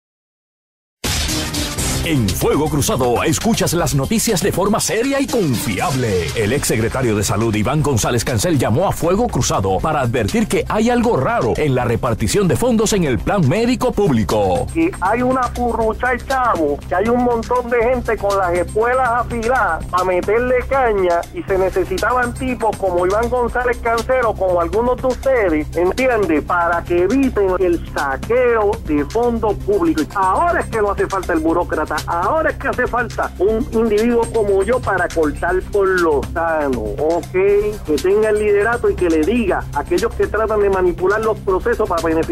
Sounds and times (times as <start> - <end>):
Music: 1.0 - 42.3
Speech: 2.1 - 42.3.